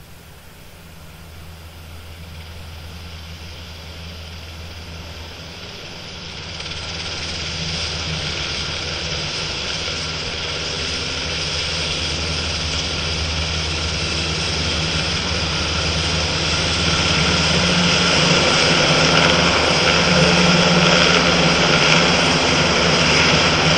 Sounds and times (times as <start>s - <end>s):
Outside, urban or manmade: 0.0s - 23.7s
Propeller, airscrew: 0.0s - 23.7s.